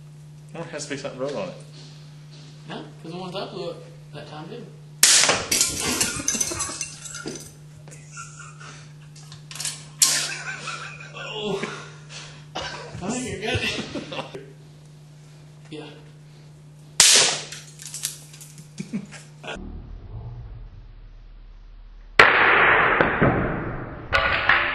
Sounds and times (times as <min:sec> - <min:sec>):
Speech: 0:00.5 - 0:01.6, 0:02.7 - 0:04.8, 0:13.0 - 0:13.8, 0:15.7 - 0:16.1
Burst, pop: 0:05.0 - 0:05.5, 0:22.1 - 0:24.7.